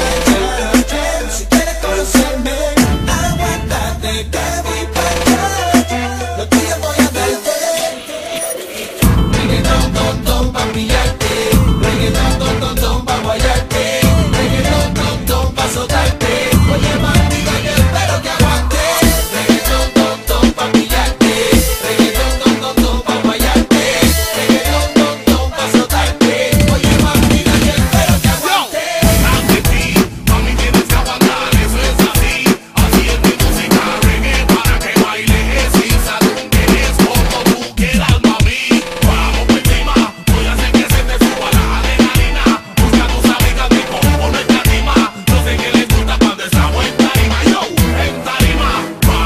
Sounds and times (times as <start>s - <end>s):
Music: 0.0s - 49.2s.